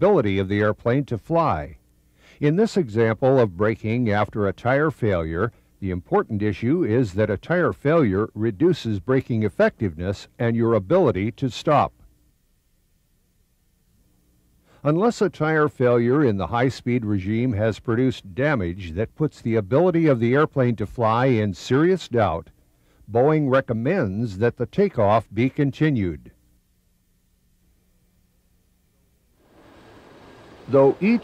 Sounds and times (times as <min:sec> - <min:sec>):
Speech: 0:00.0 - 0:01.8, 0:02.4 - 0:12.1, 0:14.8 - 0:22.5, 0:23.1 - 0:26.4, 0:30.7 - 0:31.2.